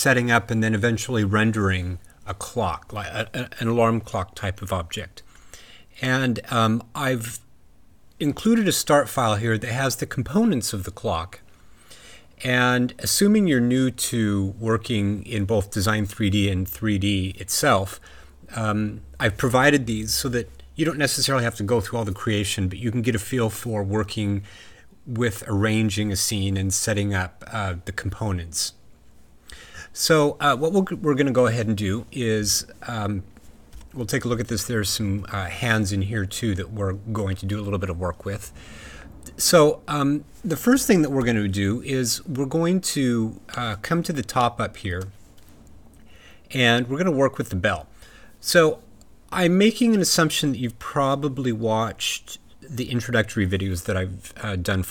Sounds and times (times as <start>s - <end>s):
Speech: 0.0s - 5.3s, 6.0s - 7.5s, 8.2s - 11.4s, 12.4s - 28.8s, 29.9s - 33.3s, 33.9s - 38.6s, 39.3s - 45.2s, 46.5s - 54.9s.